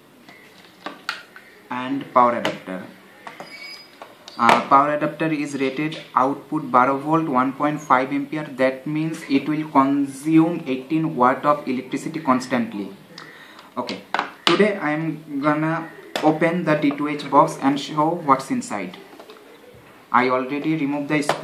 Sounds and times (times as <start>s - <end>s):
Speech: 13.8s - 19.0s, 20.2s - 21.4s.